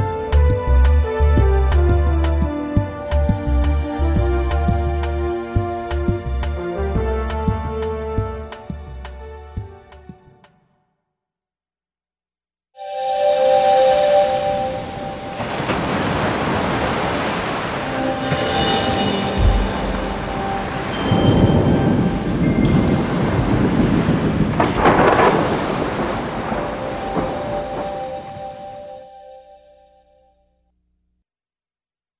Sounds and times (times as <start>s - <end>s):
Waves, surf: 13.2s - 29.4s
Wind noise (microphone): 21.2s - 26.7s.